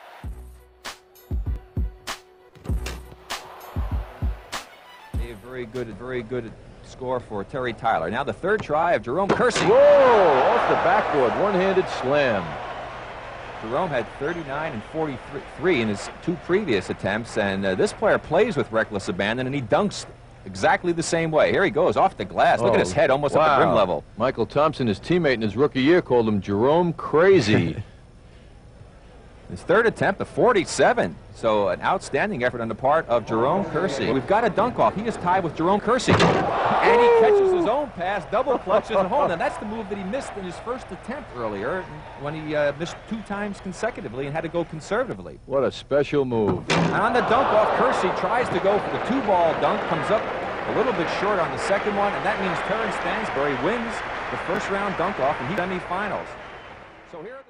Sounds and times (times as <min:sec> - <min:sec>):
Speech: 0:05.2 - 0:12.5, 0:13.6 - 0:27.9, 0:29.5 - 0:56.3
Slam: 0:36.1 - 0:36.6.